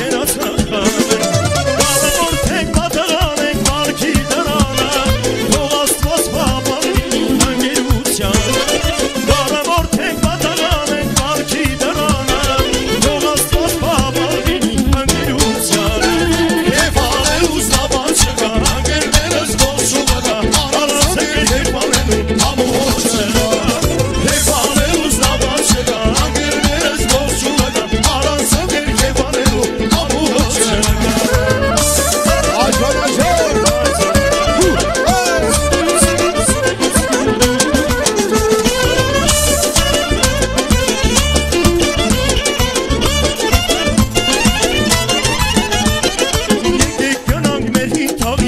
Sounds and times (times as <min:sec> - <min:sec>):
Music: 0:00.0 - 0:48.4.